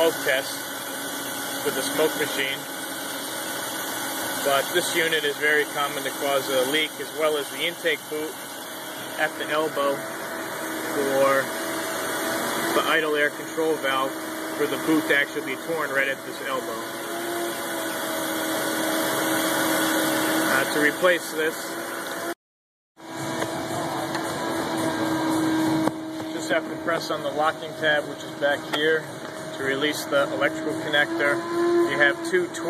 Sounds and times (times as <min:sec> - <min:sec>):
Speech: 0:00.0 - 0:00.6, 0:01.6 - 0:02.7, 0:04.4 - 0:08.4, 0:09.2 - 0:10.0, 0:10.9 - 0:11.5, 0:12.8 - 0:16.8, 0:20.5 - 0:21.7, 0:26.3 - 0:32.6
Engine: 0:00.0 - 0:22.4, 0:23.0 - 0:32.6
Music: 0:23.1 - 0:26.8.